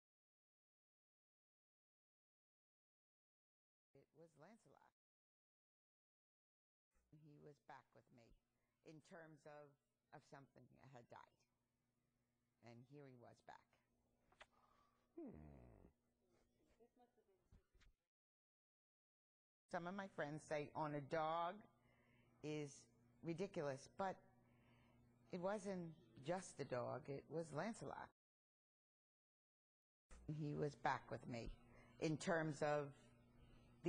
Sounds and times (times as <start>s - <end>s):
Speech: 4.0s - 4.9s, 7.2s - 11.4s, 12.6s - 13.8s, 19.7s - 21.7s, 22.4s - 24.2s, 25.4s - 28.2s, 30.3s - 33.0s.